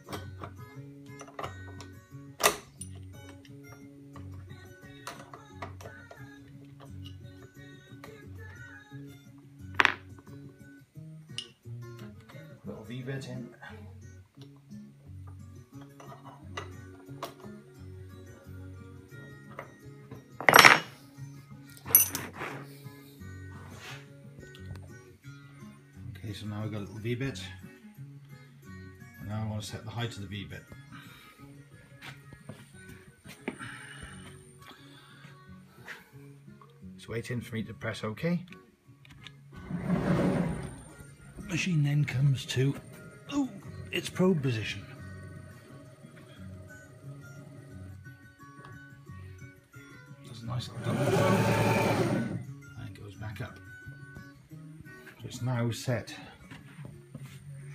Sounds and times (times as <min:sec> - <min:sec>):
Music: 0:00.0 - 0:57.7
Speech: 0:29.3 - 0:30.6, 0:37.0 - 0:38.5, 0:41.5 - 0:44.9, 0:55.2 - 0:56.3.